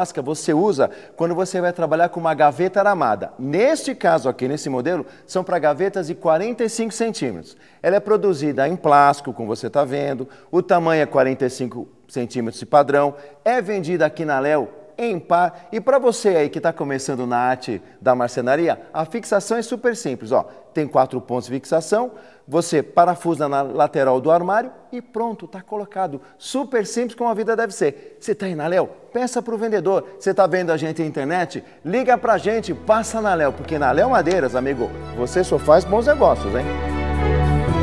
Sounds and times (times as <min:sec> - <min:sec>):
Speech: 0:00.0 - 0:36.7
Music: 0:32.0 - 0:37.8.